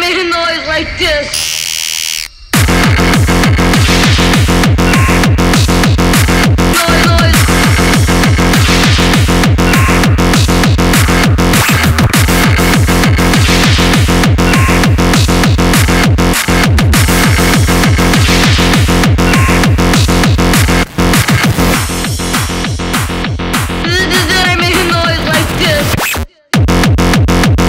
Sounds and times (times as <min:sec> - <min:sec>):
Music: 0:02.2 - 0:27.6.